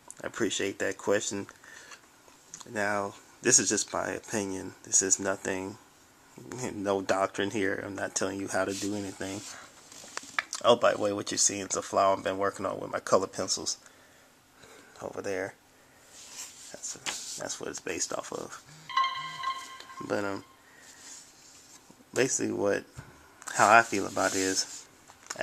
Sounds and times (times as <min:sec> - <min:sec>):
Speech: 0:00.2 - 0:01.6, 0:02.6 - 0:05.8, 0:06.4 - 0:09.6, 0:10.6 - 0:13.9, 0:15.0 - 0:15.6, 0:16.7 - 0:18.6, 0:20.0 - 0:20.4, 0:22.1 - 0:25.4.